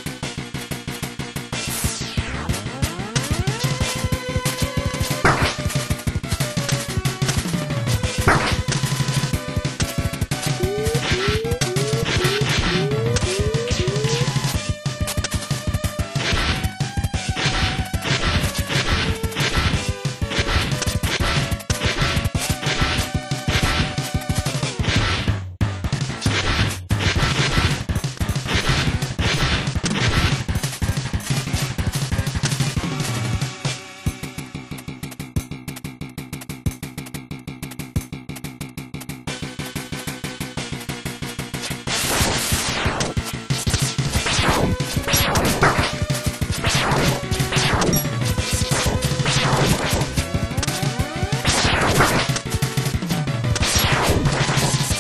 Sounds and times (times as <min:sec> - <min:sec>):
Music: 0:00.0 - 0:55.0.